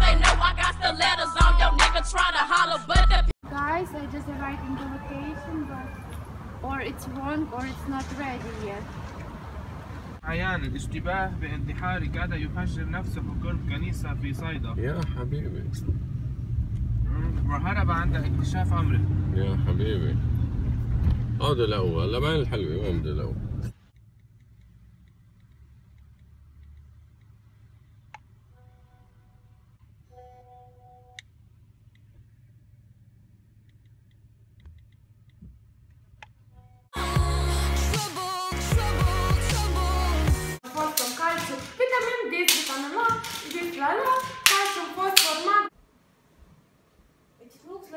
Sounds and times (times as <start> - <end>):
Music: 0.0 - 3.3, 37.0 - 40.6.